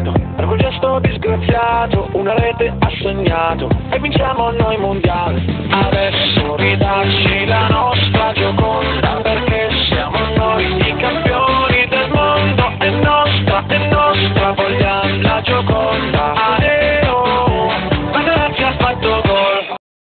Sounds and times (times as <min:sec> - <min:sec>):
Music: 0:00.0 - 0:19.8.